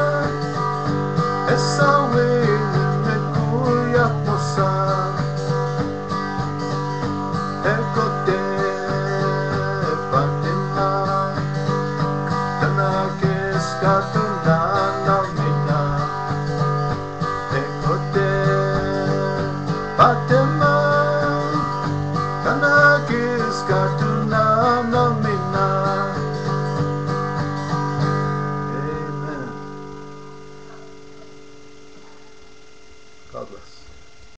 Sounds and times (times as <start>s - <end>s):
Guitar: 0.0s - 34.3s
Singing: 1.4s - 5.5s, 7.6s - 11.7s, 12.5s - 16.5s, 17.4s - 26.5s
Speech: 33.3s - 33.9s.